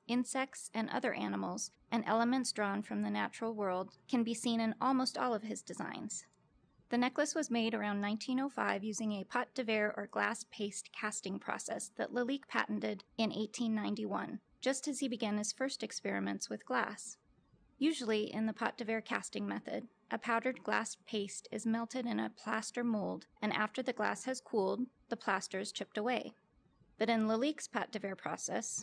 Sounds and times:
Speech: 0.0 - 6.2, 7.0 - 17.2, 17.8 - 26.3, 27.0 - 28.8.

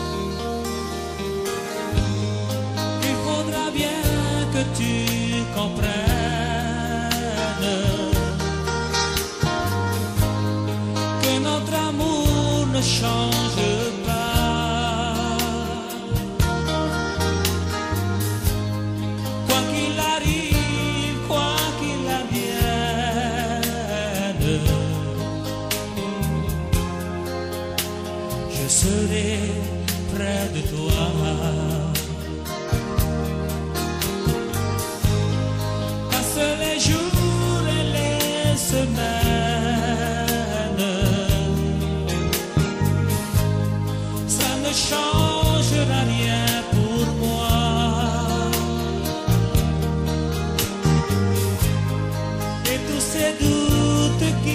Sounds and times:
Music: 0.0 - 54.5.

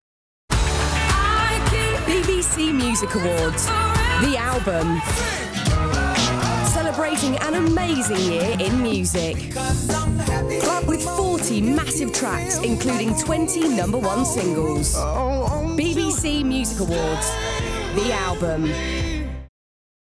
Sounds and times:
Music: 0.5 - 19.5
Speech: 2.1 - 5.1, 6.7 - 9.4, 10.9 - 17.3, 18.0 - 18.8.

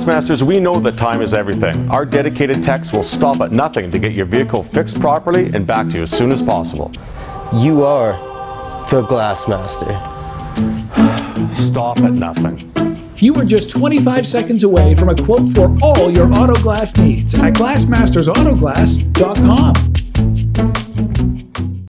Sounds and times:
Speech: 0.0 - 6.9, 8.9 - 10.0, 11.6 - 12.6, 13.2 - 19.8
Music: 0.0 - 21.9.

